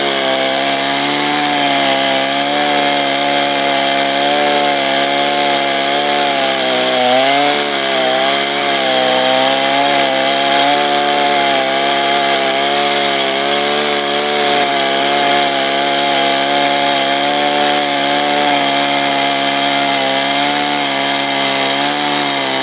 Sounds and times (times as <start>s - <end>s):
Chainsaw: 0.0s - 22.6s.